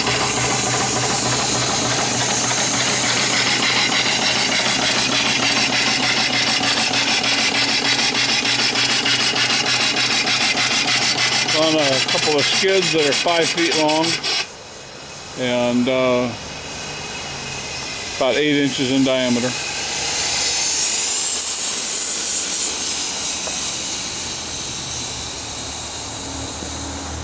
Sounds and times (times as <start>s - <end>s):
Engine: 0.0s - 27.2s
Speech: 11.5s - 14.2s, 15.4s - 16.4s, 18.2s - 19.6s.